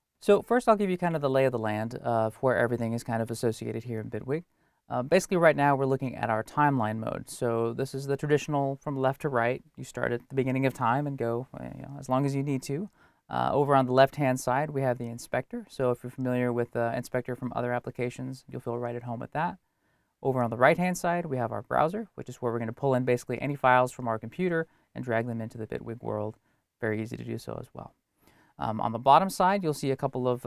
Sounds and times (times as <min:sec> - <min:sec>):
Speech: 0:00.2 - 0:19.6, 0:20.2 - 0:28.0, 0:28.6 - 0:30.4.